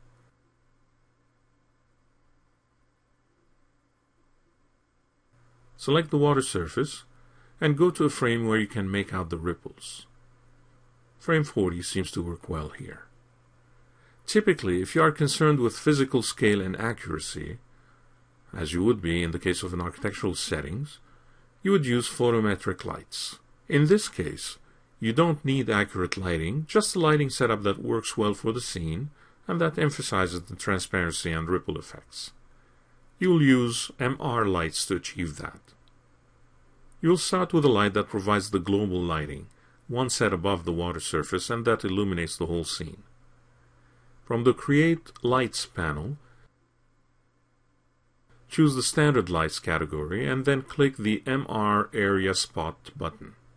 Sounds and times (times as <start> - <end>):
Speech: 5.8 - 10.2, 11.2 - 13.2, 14.2 - 17.7, 18.5 - 32.4, 33.2 - 35.8, 37.0 - 43.1, 44.3 - 46.3, 48.5 - 53.4.